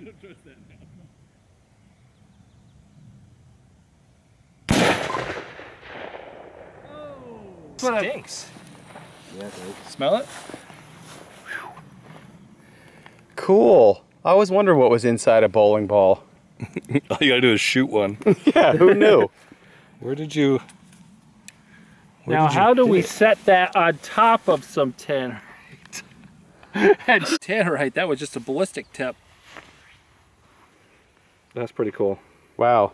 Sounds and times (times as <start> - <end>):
Speech: 6.9 - 8.5, 22.2 - 25.4, 27.1 - 29.2, 31.5 - 32.9.